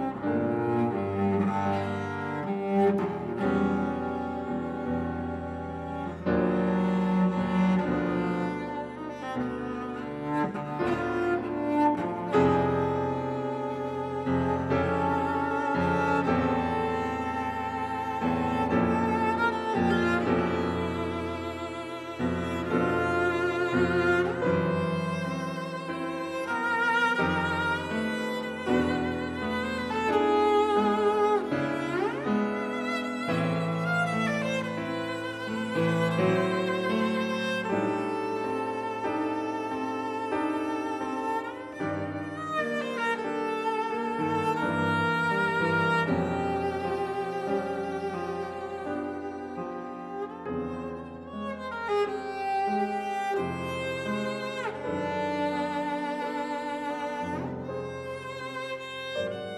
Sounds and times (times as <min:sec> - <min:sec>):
Cello: 0:00.0 - 0:59.5
Orchestra: 0:00.0 - 0:59.5
Piano: 0:00.0 - 0:59.5.